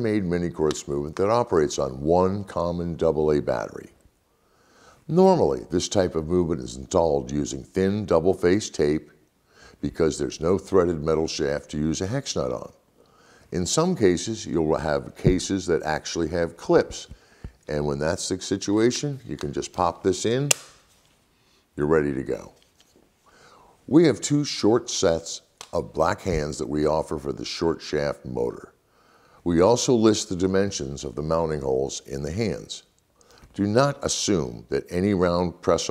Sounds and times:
Speech: 0.0s - 4.0s, 5.1s - 9.2s, 9.8s - 12.8s, 13.5s - 20.6s, 21.8s - 22.6s, 23.9s - 28.8s, 29.4s - 32.9s, 33.5s - 35.9s.

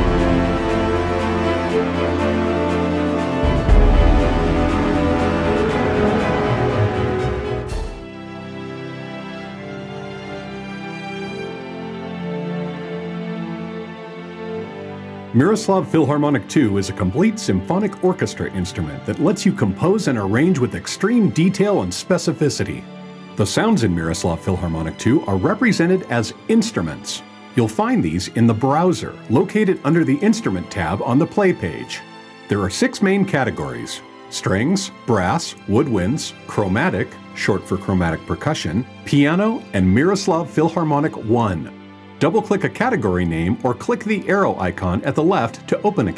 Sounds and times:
Music: 0.0s - 46.1s
Speech: 15.4s - 22.8s, 23.4s - 46.1s.

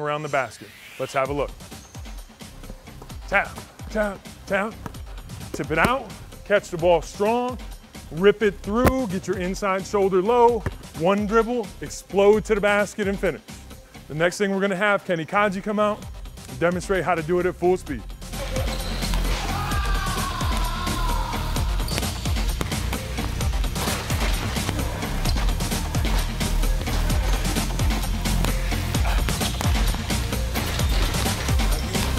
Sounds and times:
Speech: 0.0s - 1.5s, 5.6s - 13.4s, 14.1s - 18.0s
Music: 0.0s - 32.1s.

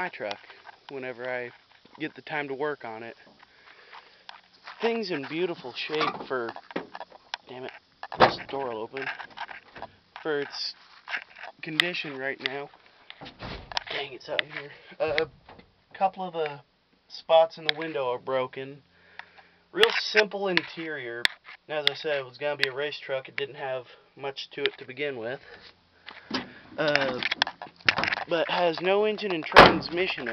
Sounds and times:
Speech: 0.0s - 3.2s, 4.8s - 6.6s, 7.5s - 9.2s, 10.2s - 10.8s, 11.6s - 12.7s, 13.9s - 15.3s, 16.0s - 18.8s, 19.8s - 25.5s, 26.8s - 27.3s, 28.3s - 30.3s.

